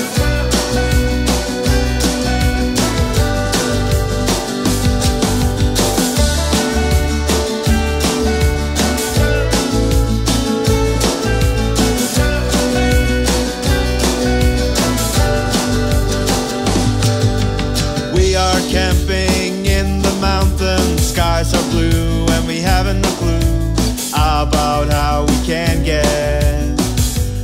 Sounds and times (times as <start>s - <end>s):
Music: 0.0s - 27.4s.